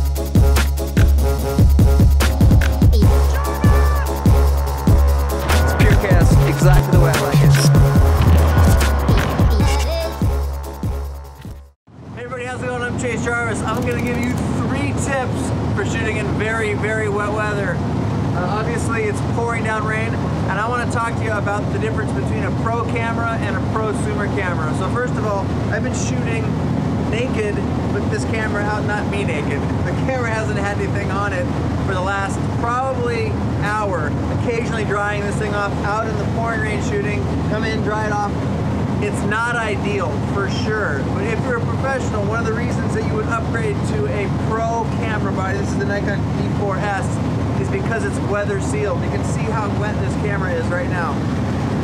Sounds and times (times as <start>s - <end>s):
Music: 0.0s - 11.8s
Speech: 3.2s - 4.1s, 5.5s - 7.8s, 12.2s - 17.8s, 18.4s - 26.5s, 27.1s - 38.4s, 39.0s - 51.2s.